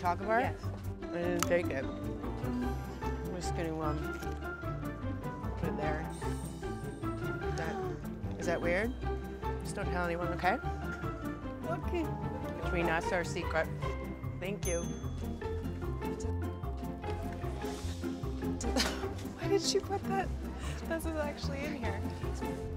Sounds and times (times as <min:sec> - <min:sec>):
Music: 0:00.0 - 0:22.7.